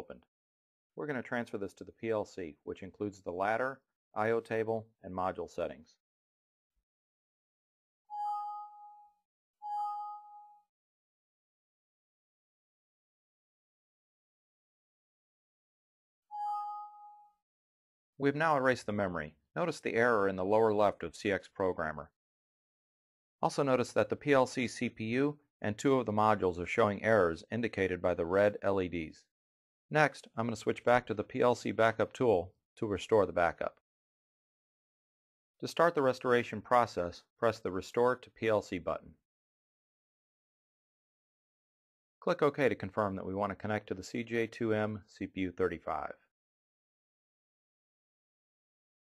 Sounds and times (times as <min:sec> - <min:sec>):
Speech: 0:00.0 - 0:00.2, 0:01.0 - 0:06.0, 0:18.2 - 0:22.1, 0:23.4 - 0:29.3, 0:29.9 - 0:33.8, 0:35.6 - 0:39.1, 0:42.2 - 0:46.3.